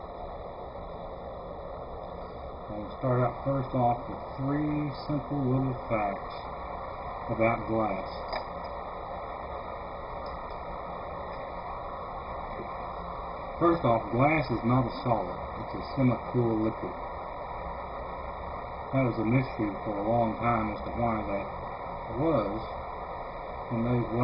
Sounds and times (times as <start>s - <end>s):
Speech: 2.7s - 6.4s, 7.3s - 8.3s, 13.6s - 17.0s, 18.9s - 21.5s, 22.1s - 22.7s, 23.7s - 24.2s.